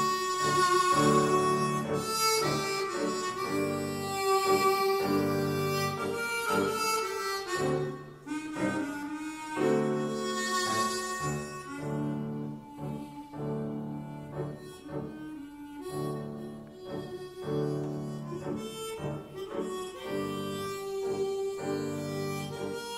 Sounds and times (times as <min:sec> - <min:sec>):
Music: 0:00.0 - 0:22.9.